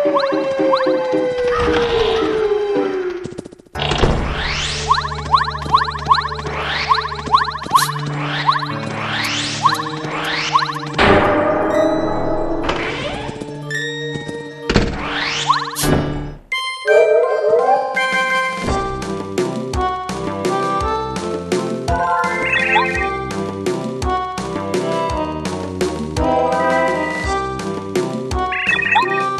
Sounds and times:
Music: 0.0 - 3.0, 3.8 - 29.4.

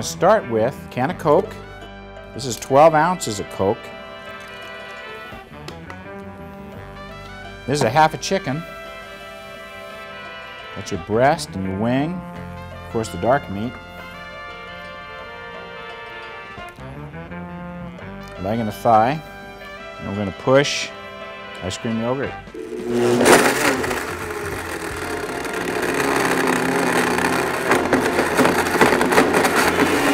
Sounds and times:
Speech: 0.0 - 1.6, 2.4 - 3.8, 7.7 - 8.6, 10.8 - 12.2, 13.0 - 13.8, 18.4 - 19.2, 20.0 - 20.9, 21.6 - 22.4
Music: 0.0 - 30.1.

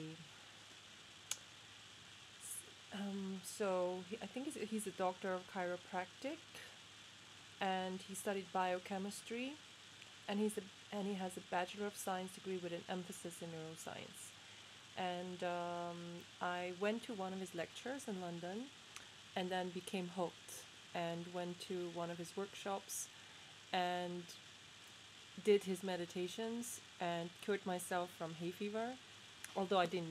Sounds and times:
Speech: 0.0 - 0.3, 2.4 - 6.8, 7.6 - 9.6, 10.3 - 14.3, 15.0 - 18.7, 19.4 - 23.1, 23.8 - 24.4, 25.4 - 30.1.

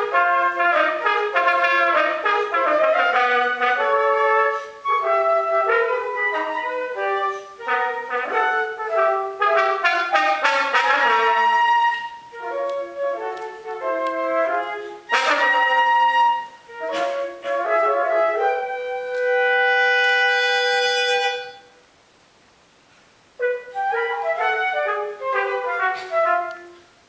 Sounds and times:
French horn: 0.0 - 21.9, 23.3 - 27.0.

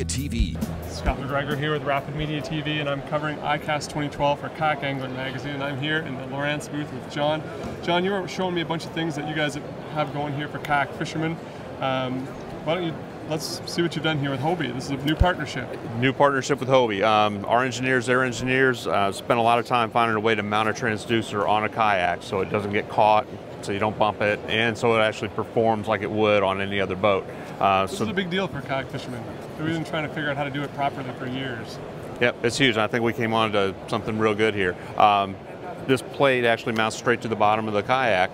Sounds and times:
Speech: 0.0 - 38.3.

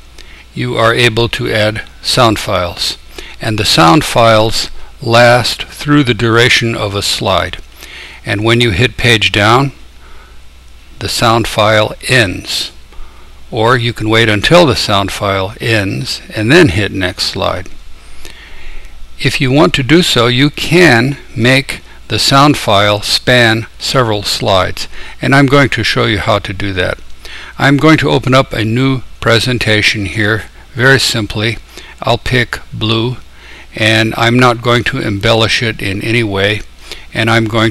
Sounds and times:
Speech: 0.5 - 7.6, 8.2 - 9.8, 11.0 - 12.8, 13.5 - 17.8, 19.2 - 27.0, 27.6 - 37.7.

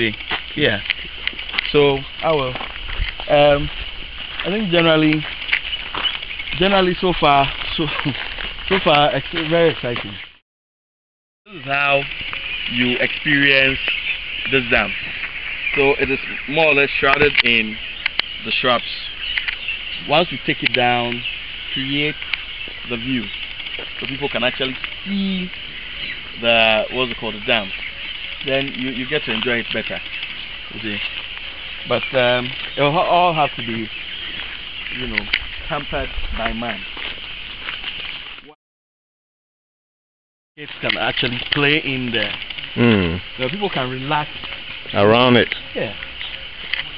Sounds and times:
Speech: 0.0 - 0.9, 1.7 - 2.6, 3.3 - 3.7, 4.4 - 5.3, 6.6 - 10.2, 11.5 - 12.1, 12.7 - 13.9, 14.5 - 15.0, 15.8 - 17.8, 18.4 - 19.1, 20.0 - 21.2, 21.8 - 22.2, 22.9 - 23.3, 24.0 - 25.6, 26.4 - 27.8, 28.5 - 30.0, 30.8 - 31.0, 31.9 - 33.9, 35.0 - 36.9, 40.6 - 44.3, 44.9 - 46.0.

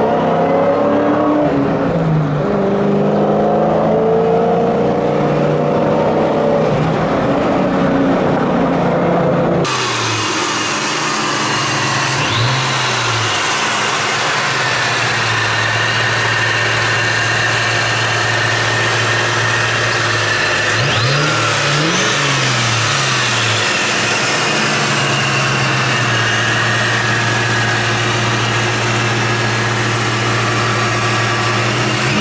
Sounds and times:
Car: 0.0 - 32.2
Idling: 9.7 - 32.2.

